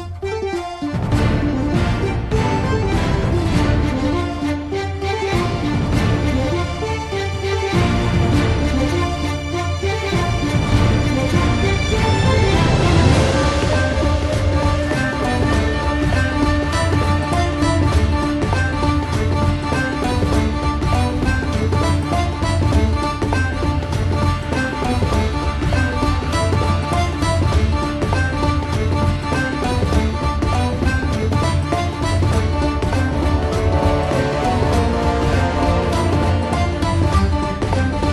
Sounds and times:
Theme music: 0:00.0 - 0:38.1.

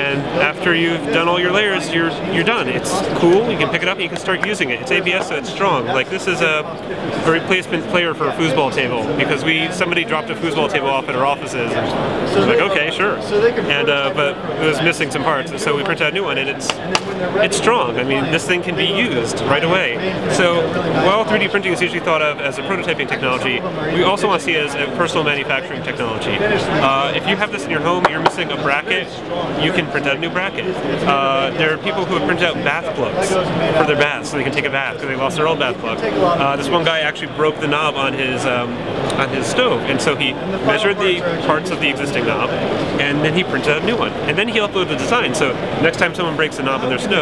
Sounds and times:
Speech: 0:00.0 - 0:47.2.

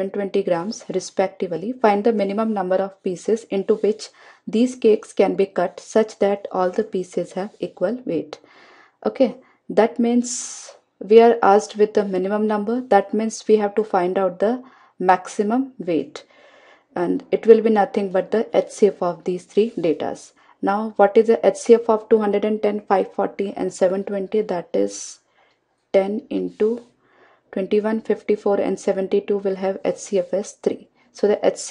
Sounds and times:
Speech: 0:00.0 - 0:08.4, 0:09.0 - 0:16.2, 0:17.0 - 0:25.2, 0:26.0 - 0:26.9, 0:27.6 - 0:31.7.

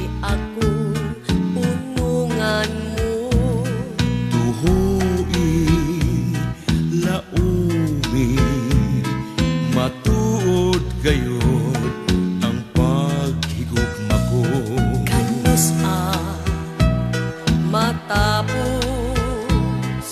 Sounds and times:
Music: 0:00.0 - 0:20.1.

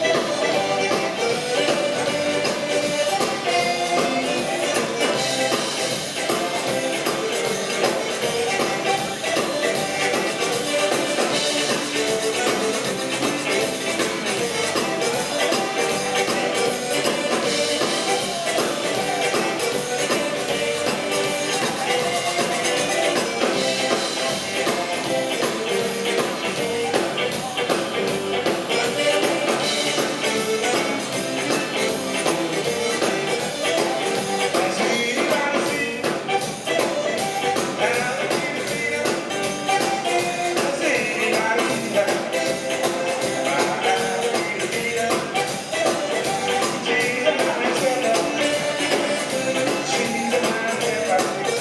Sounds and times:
Music: 0:00.0 - 0:51.6.

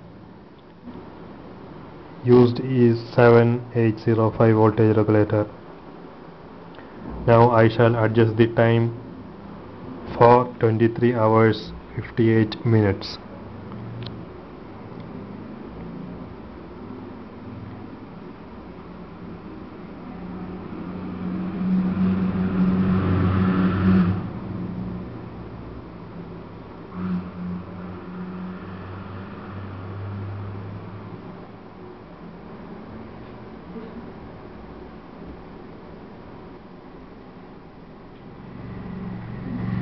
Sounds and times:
Speech: 0:02.2 - 0:05.5, 0:07.2 - 0:09.0, 0:10.1 - 0:13.3.

